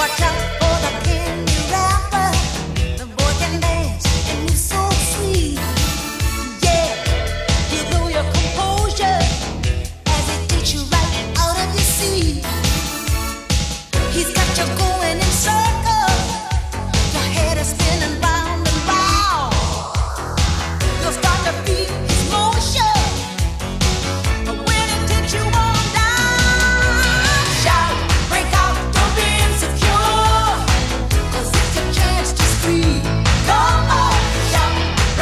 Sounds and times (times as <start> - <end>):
Music: 0.0 - 35.2.